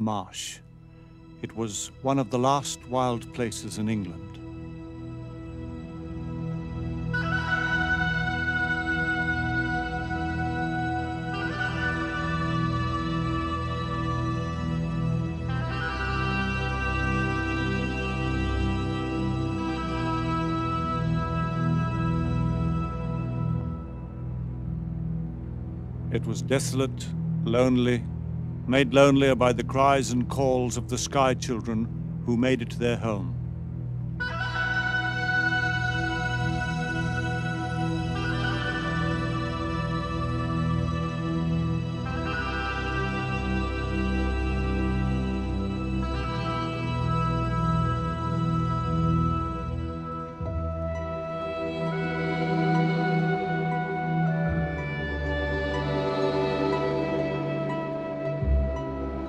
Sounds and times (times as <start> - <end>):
Speech: 0.0 - 0.6, 1.4 - 4.4, 26.1 - 28.1, 28.7 - 33.4
Music: 0.0 - 59.2.